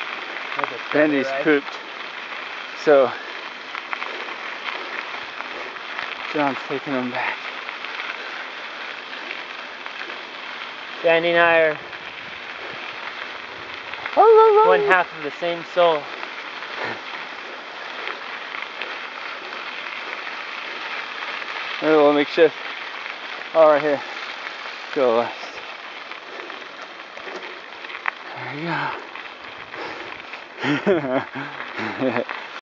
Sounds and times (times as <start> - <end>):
Speech: 0.6 - 1.7, 14.2 - 16.1, 23.6 - 24.0.